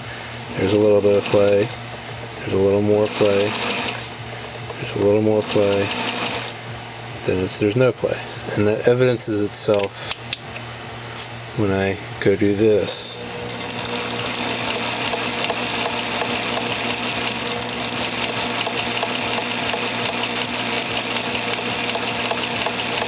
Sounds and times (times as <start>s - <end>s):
Speech: 0.6s - 1.7s, 2.4s - 3.5s, 4.8s - 5.9s, 7.3s - 9.9s, 11.6s - 13.2s
Sewing machine: 0.6s - 1.8s, 2.9s - 4.1s, 5.3s - 6.6s, 13.3s - 23.0s.